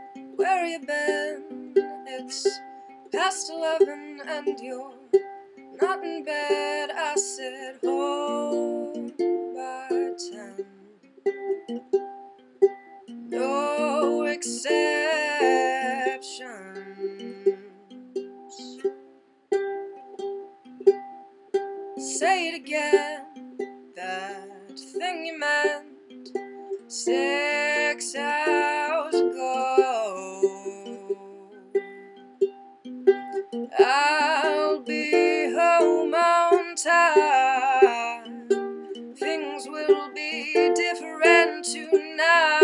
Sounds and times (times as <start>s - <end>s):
Music: 0.0s - 42.6s.